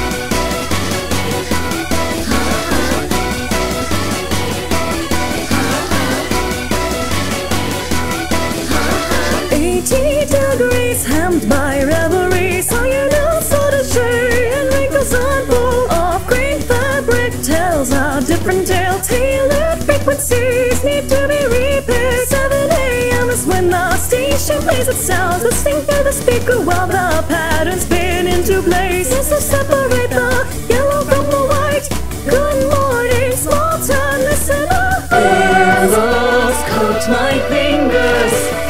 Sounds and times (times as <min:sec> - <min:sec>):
Music: 0:00.0 - 0:38.7.